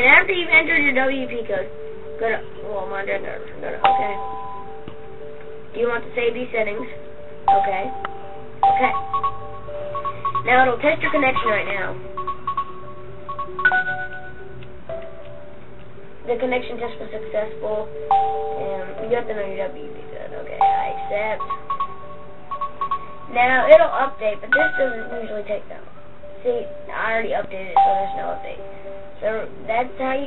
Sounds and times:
Speech: 0.0s - 4.2s, 10.5s - 12.0s, 16.3s - 17.9s, 18.6s - 21.4s, 23.3s - 28.6s, 29.2s - 30.2s
Music: 0.0s - 30.2s.

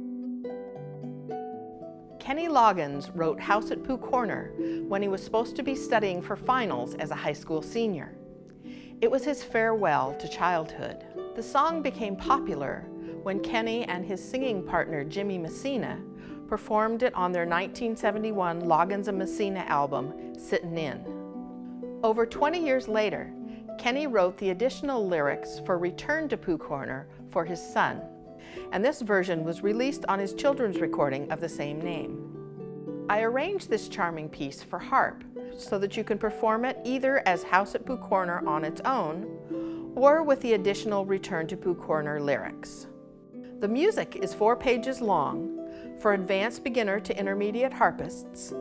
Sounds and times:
Music: 0.0s - 48.6s
Speech: 2.2s - 8.2s, 9.0s - 21.0s, 22.0s - 28.0s, 28.7s - 32.2s, 33.1s - 39.2s, 40.0s - 42.9s, 43.6s - 48.6s.

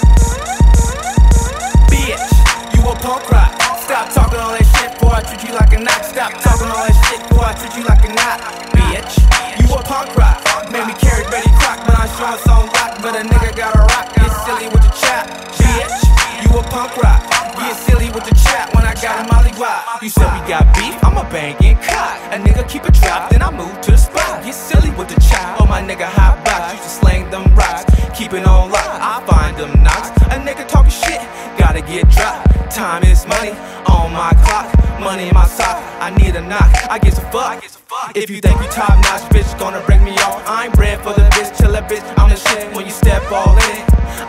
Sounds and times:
Punk rock: 0.0s - 37.2s, 38.5s - 44.2s.

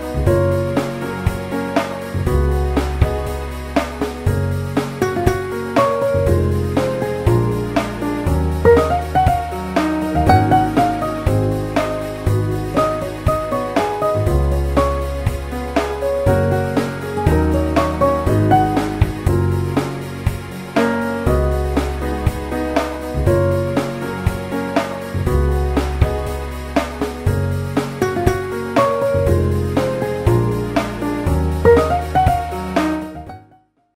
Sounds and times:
Music: 0.0s - 33.9s.

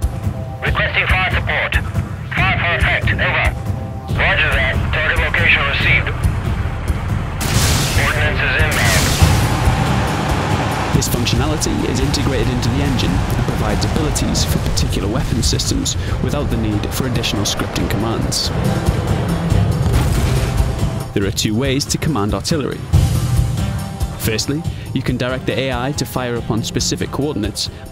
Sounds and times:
Music: 0.0s - 27.9s
Speech: 0.6s - 1.8s, 2.4s - 3.6s, 4.2s - 6.2s, 8.0s - 9.1s, 11.0s - 18.5s, 21.2s - 22.8s, 24.2s - 27.7s.

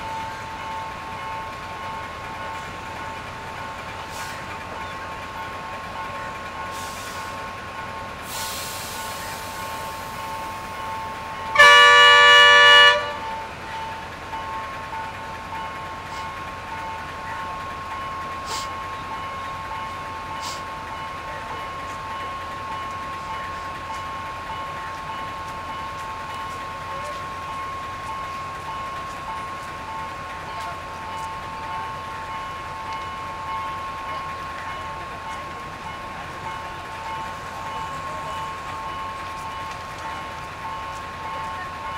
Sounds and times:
Vehicle: 0.0s - 41.9s.

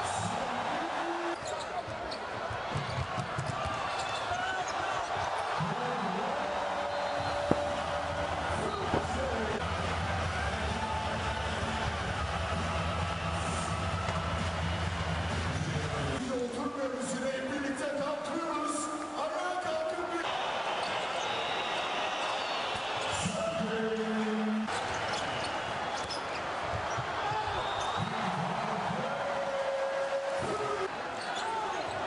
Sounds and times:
Music: 7.3s - 16.3s
Speech: 8.5s - 9.6s, 15.8s - 20.3s, 23.2s - 24.7s.

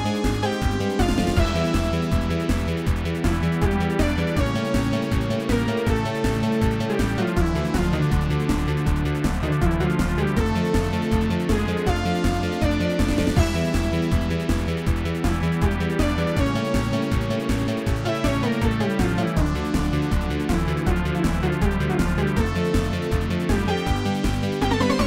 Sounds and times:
Video game music: 0.0s - 25.0s.

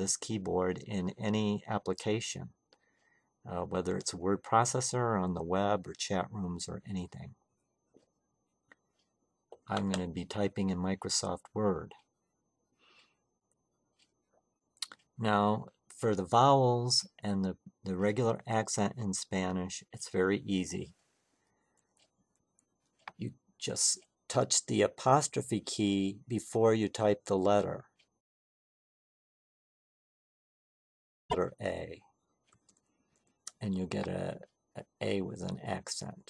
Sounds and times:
Speech: 0.0s - 2.6s, 3.5s - 7.4s, 9.6s - 12.0s, 14.8s - 21.0s, 23.2s - 27.9s, 31.3s - 32.0s, 33.5s - 36.2s.

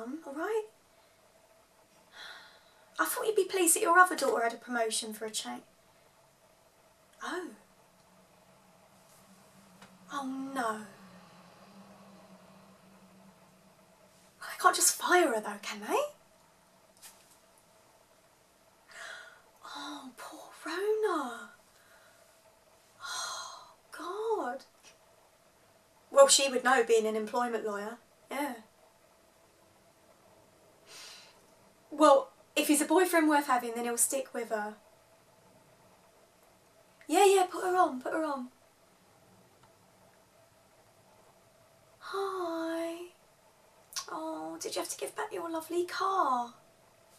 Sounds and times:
Narration, monologue: 0.0s - 30.2s, 30.9s - 38.8s, 41.6s - 47.0s.

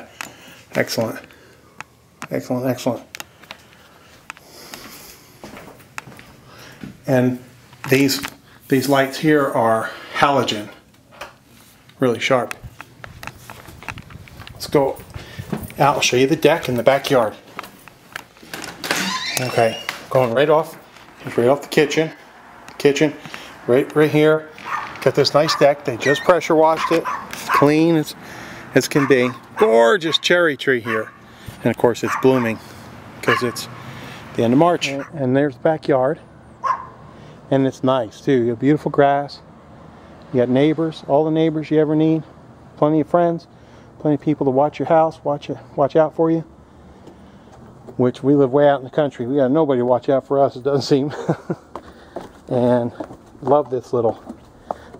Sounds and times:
Speech: 0.7s - 1.2s, 2.3s - 3.1s, 7.1s - 10.8s, 12.0s - 12.6s, 14.6s - 15.0s, 15.8s - 17.4s, 19.4s - 22.2s, 22.8s - 28.2s, 28.8s - 32.6s, 33.2s - 33.7s, 34.4s - 36.2s, 37.5s - 39.4s, 40.3s - 46.5s, 48.0s - 51.3s, 52.5s - 54.2s.

